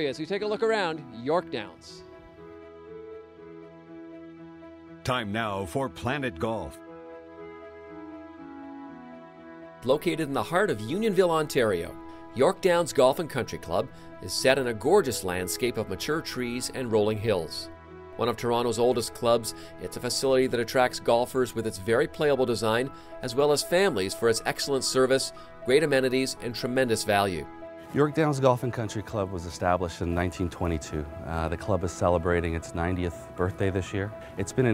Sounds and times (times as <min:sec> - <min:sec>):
Speech: 0:00.0 - 0:02.0, 0:05.0 - 0:06.8, 0:09.8 - 0:34.7
Music: 0:00.0 - 0:34.7.